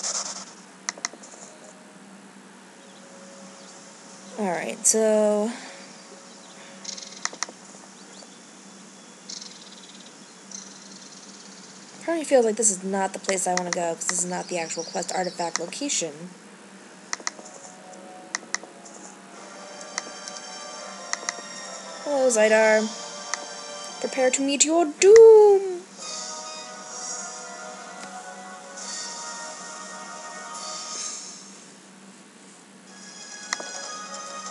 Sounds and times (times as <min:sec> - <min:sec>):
Speech: 0:04.4 - 0:05.7, 0:12.0 - 0:16.4, 0:22.1 - 0:22.9, 0:24.0 - 0:25.9.